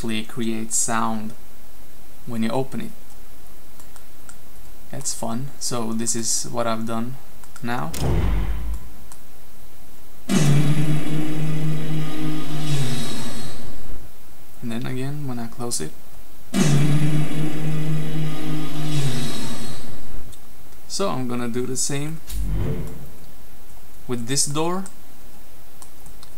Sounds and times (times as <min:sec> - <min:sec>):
Speech: 0:00.0 - 0:01.4, 0:02.3 - 0:03.0, 0:04.9 - 0:08.0, 0:14.6 - 0:16.0, 0:20.9 - 0:22.2, 0:24.1 - 0:25.0.